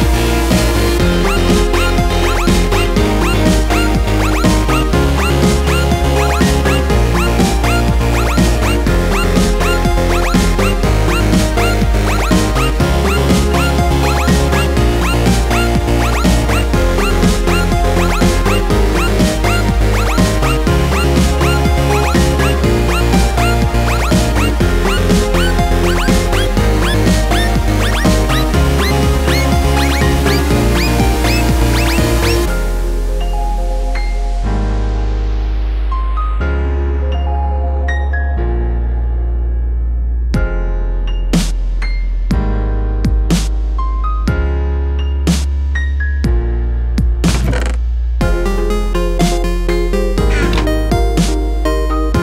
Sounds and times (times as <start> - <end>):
Music: 0.0 - 52.2.